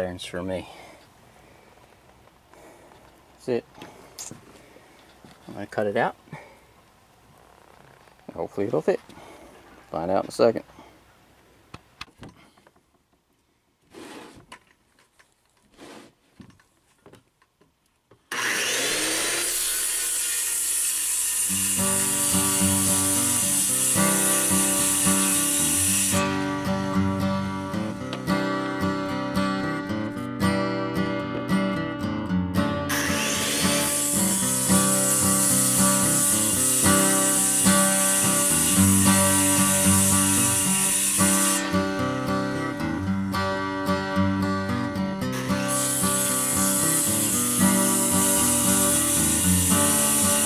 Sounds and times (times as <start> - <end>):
Music: 21.5 - 50.4.